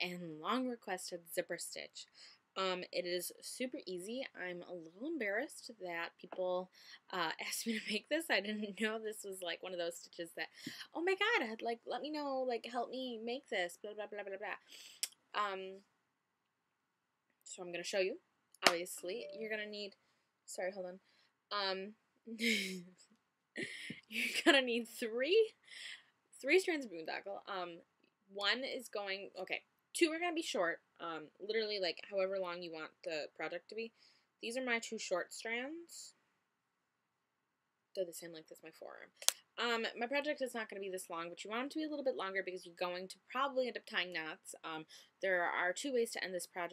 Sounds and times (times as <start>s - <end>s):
Speech: 0.0s - 14.8s, 15.4s - 15.8s, 17.5s - 19.9s, 20.5s - 22.9s, 23.6s - 27.8s, 28.4s - 36.2s, 38.0s - 46.7s.